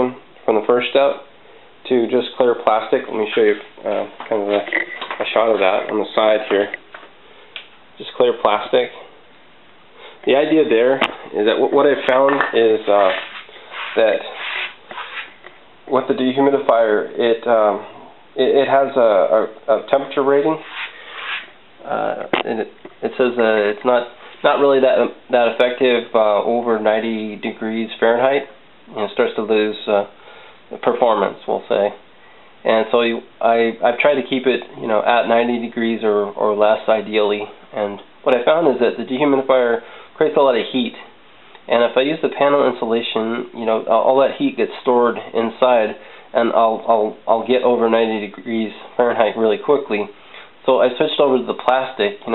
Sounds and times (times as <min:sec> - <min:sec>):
Speech: 0:00.0 - 0:06.8, 0:08.0 - 0:09.2, 0:10.2 - 0:14.5, 0:15.9 - 0:20.7, 0:21.8 - 0:32.0, 0:32.6 - 0:52.3.